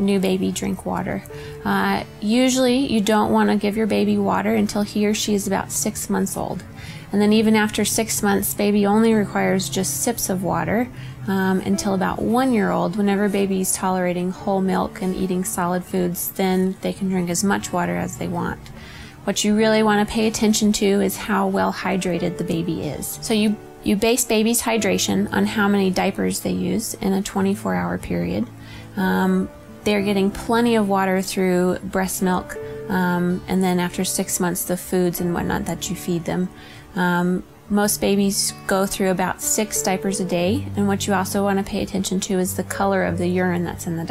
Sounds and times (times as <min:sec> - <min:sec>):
Speech: 0:00.0 - 0:18.6, 0:19.3 - 0:44.1
Music: 0:00.0 - 0:44.1.